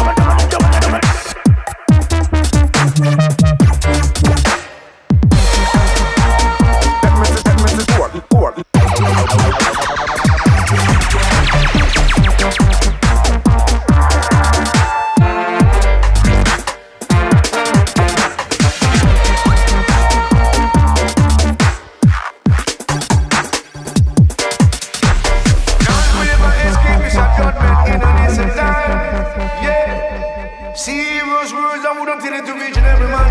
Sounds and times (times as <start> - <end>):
Electronica: 0.0 - 31.7
Reggae: 0.0 - 33.3.